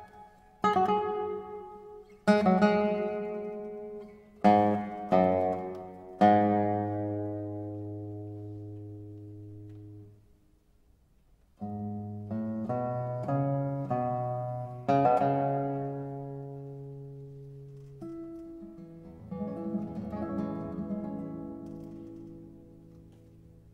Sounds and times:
Guitar: 0:00.0 - 0:23.7.

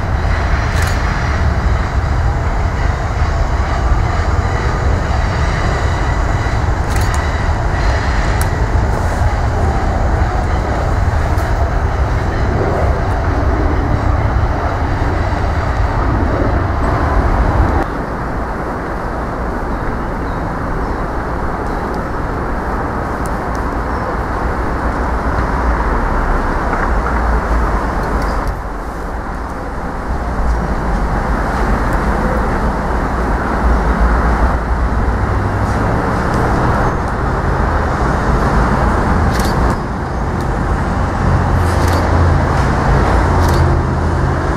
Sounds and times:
Railroad car, train wagon: 0:00.0 - 0:44.5
Train: 0:00.0 - 0:44.5.

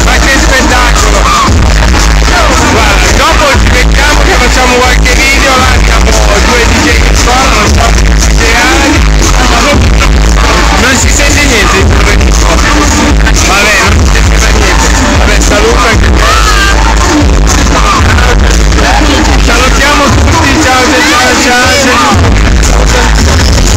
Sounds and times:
Speech: 0:00.0 - 0:01.6, 0:02.2 - 0:16.8, 0:17.8 - 0:23.3
Music: 0:00.0 - 0:23.7.

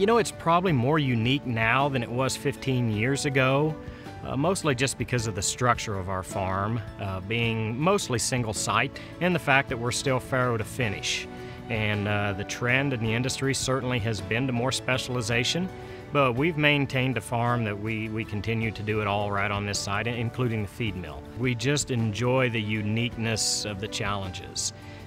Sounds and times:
Speech: 0:00.0 - 0:24.8
Music: 0:00.0 - 0:25.0.

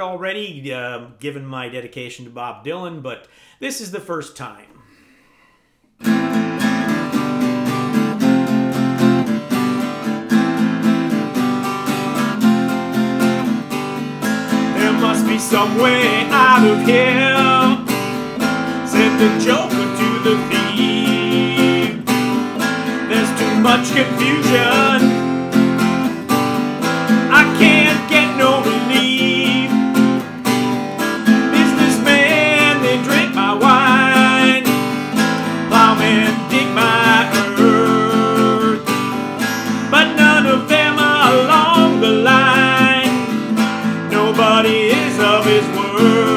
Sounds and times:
Speech: 0:00.0 - 0:04.8
Strum: 0:06.0 - 0:46.3.

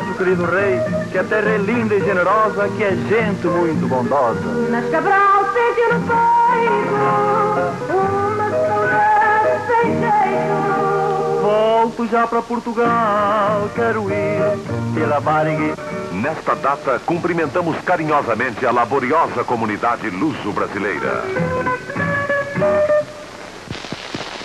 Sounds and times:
Music: 0:00.0 - 0:23.6
Speech: 0:01.6 - 0:04.4, 0:16.1 - 0:21.4.

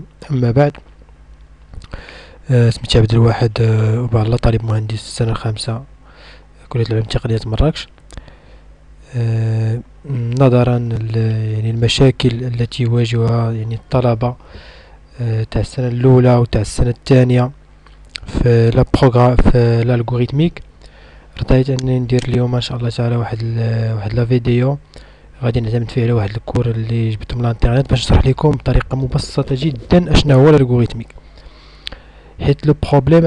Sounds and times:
Speech: 0:00.0 - 0:00.8, 0:02.5 - 0:05.9, 0:06.6 - 0:07.9, 0:09.0 - 0:14.4, 0:15.1 - 0:17.6, 0:18.2 - 0:20.7, 0:21.4 - 0:24.8, 0:25.4 - 0:31.1, 0:32.4 - 0:33.2.

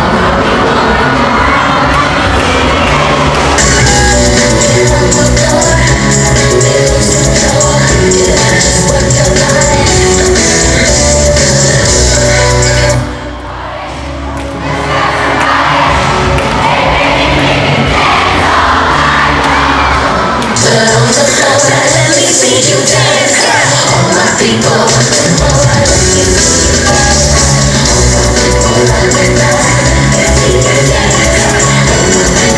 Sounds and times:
Dance music: 0:00.0 - 0:32.5.

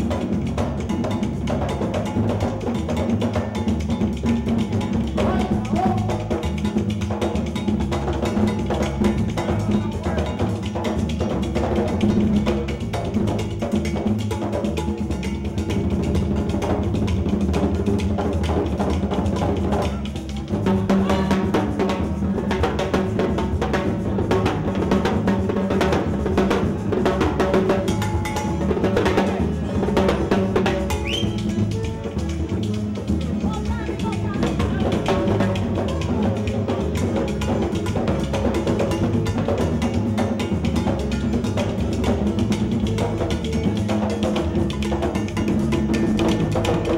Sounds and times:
Wood block: 0:00.0 - 0:46.9.

